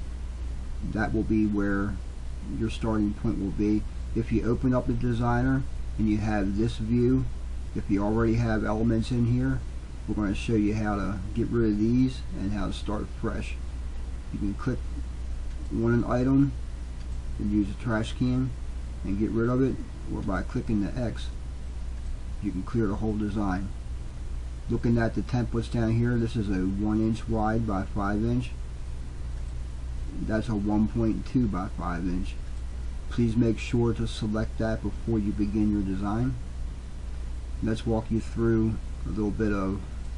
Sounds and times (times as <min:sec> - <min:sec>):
Speech: 0:00.8 - 0:13.6, 0:14.3 - 0:14.9, 0:15.7 - 0:16.6, 0:17.4 - 0:21.4, 0:22.4 - 0:23.8, 0:24.7 - 0:28.6, 0:30.1 - 0:32.4, 0:33.1 - 0:36.4, 0:37.6 - 0:39.9.